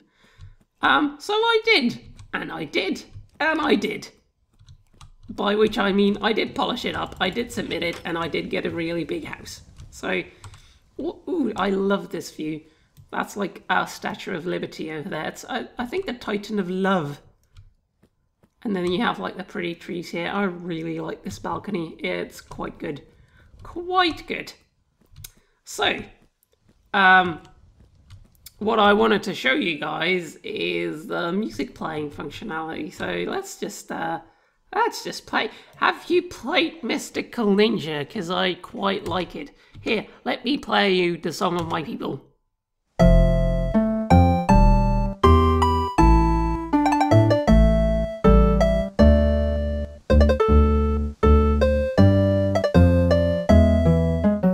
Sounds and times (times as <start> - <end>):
Speech: 0.8 - 4.2, 5.3 - 10.3, 11.0 - 17.3, 18.6 - 24.6, 25.7 - 26.2, 26.9 - 27.5, 28.5 - 42.3
Computer keyboard: 4.5 - 5.4.